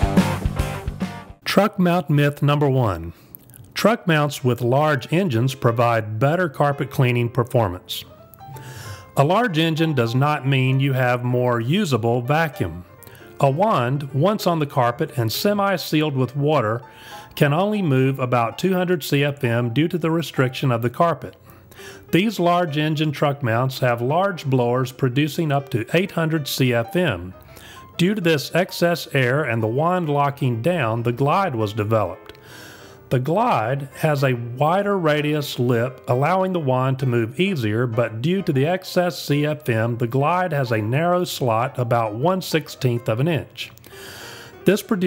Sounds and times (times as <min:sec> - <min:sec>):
Music: 0:00.0 - 0:45.0
Speech: 0:01.4 - 0:03.2, 0:03.8 - 0:08.1, 0:09.2 - 0:12.8, 0:13.4 - 0:16.8, 0:17.4 - 0:21.4, 0:22.1 - 0:27.4, 0:28.0 - 0:32.2, 0:33.1 - 0:43.8, 0:44.7 - 0:45.0.